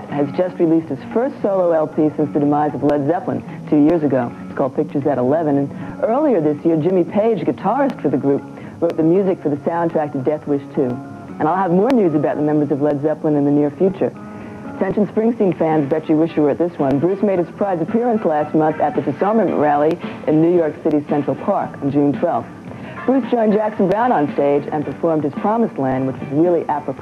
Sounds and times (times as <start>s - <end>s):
Speech: 0.0s - 14.1s, 14.8s - 27.0s.